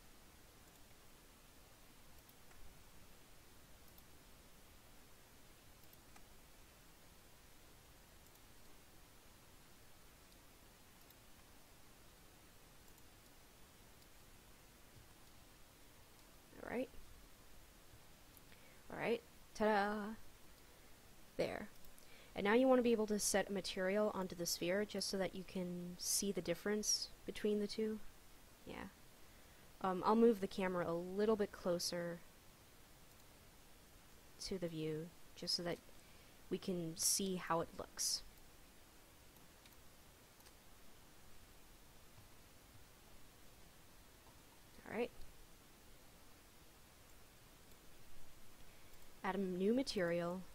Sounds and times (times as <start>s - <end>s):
Silence: 0.0s - 19.6s, 20.2s - 22.4s, 28.0s - 29.9s, 31.9s - 34.4s, 35.0s - 50.5s.